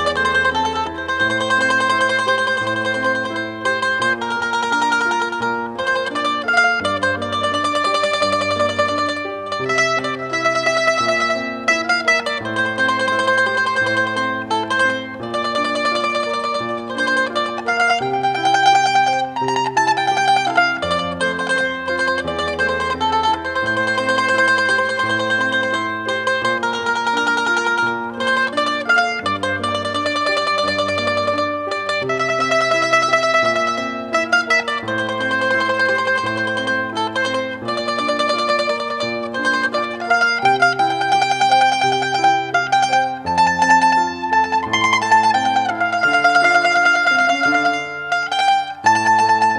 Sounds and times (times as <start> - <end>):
Mandolin: 0.0 - 49.5.